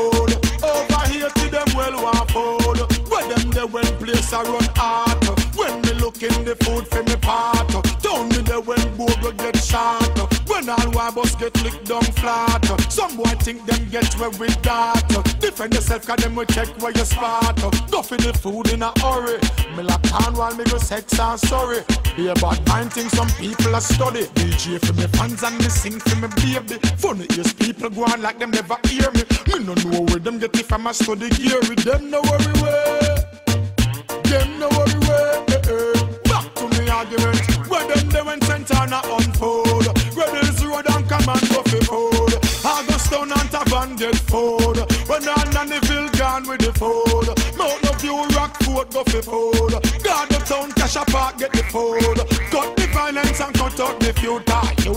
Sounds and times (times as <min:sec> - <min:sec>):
Music: 0:00.0 - 0:54.9.